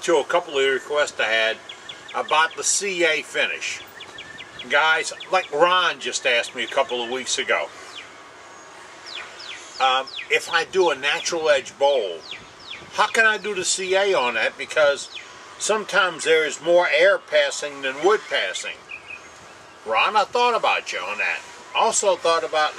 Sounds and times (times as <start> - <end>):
Speech: 0.0 - 3.8, 4.6 - 7.7, 9.8 - 12.2, 13.0 - 18.8, 19.9 - 22.7.